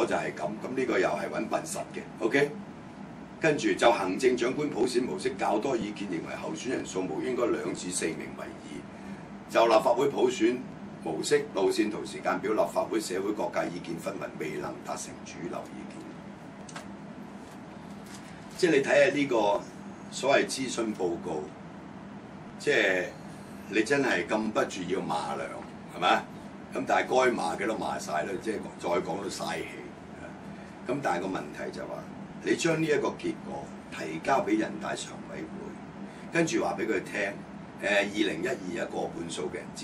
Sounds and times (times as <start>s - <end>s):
Speech: 0.0s - 2.6s, 3.4s - 8.9s, 9.5s - 16.2s, 18.5s - 21.6s, 22.6s - 39.8s.